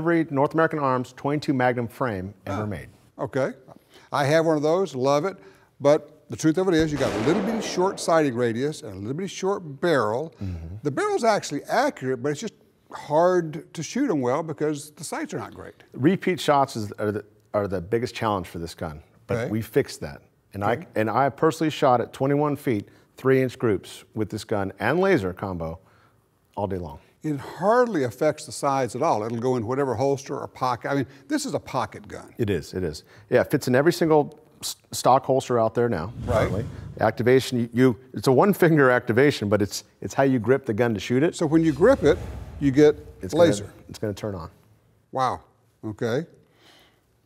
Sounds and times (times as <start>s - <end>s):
Speech: 0.0s - 25.8s, 26.6s - 44.6s, 45.2s - 46.4s.